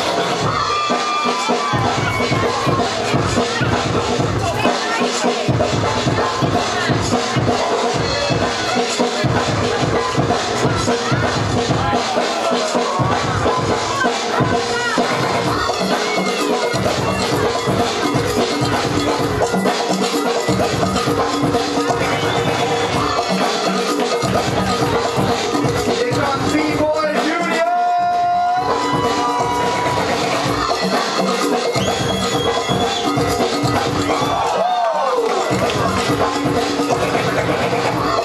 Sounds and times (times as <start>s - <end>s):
Music: 0.0s - 38.2s
Speech: 1.9s - 18.1s, 25.9s - 28.6s.